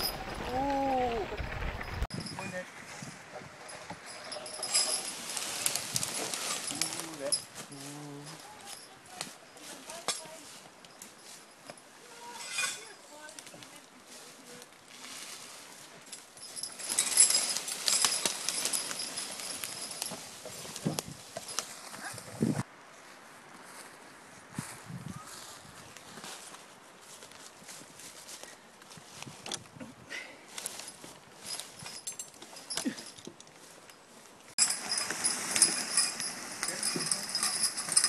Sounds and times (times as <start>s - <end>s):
Outside, rural or natural: 0.0s - 38.0s.